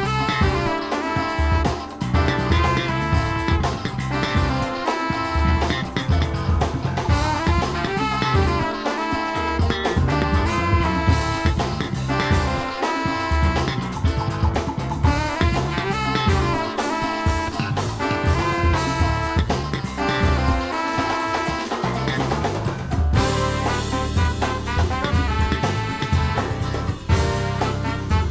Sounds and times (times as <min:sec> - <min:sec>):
Drum: 0:00.0 - 0:28.3
Drum kit: 0:00.0 - 0:28.3
Jazz: 0:00.0 - 0:28.3
Saxophone: 0:00.0 - 0:28.3.